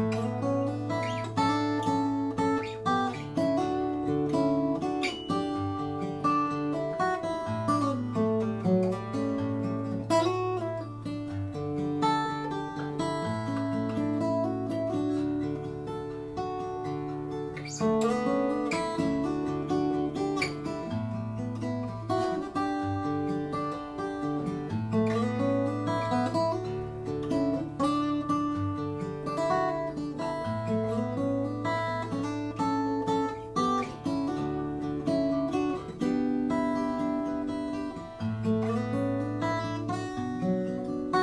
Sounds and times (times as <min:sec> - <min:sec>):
Acoustic guitar: 0:00.0 - 0:41.2.